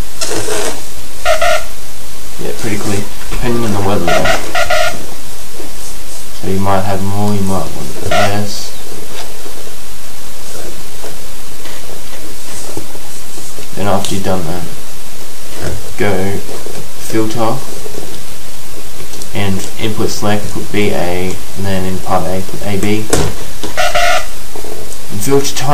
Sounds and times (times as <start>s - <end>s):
Speech: 2.4s - 4.3s, 6.4s - 8.8s, 13.8s - 14.7s, 15.6s - 17.7s, 19.3s - 23.2s, 25.1s - 25.7s.